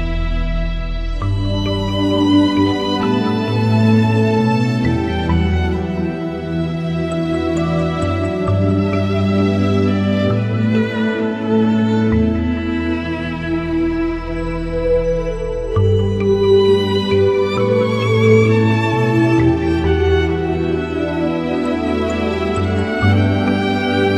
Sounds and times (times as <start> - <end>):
New-age music: 0.0 - 24.1.